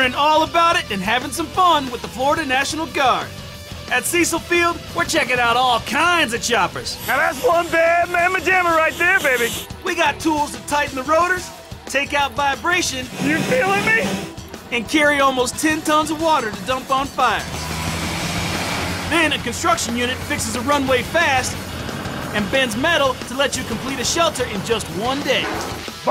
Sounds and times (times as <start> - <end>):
Speech: 0.0 - 3.3, 3.9 - 17.5, 19.1 - 21.6, 22.4 - 26.1
Music: 0.0 - 26.1.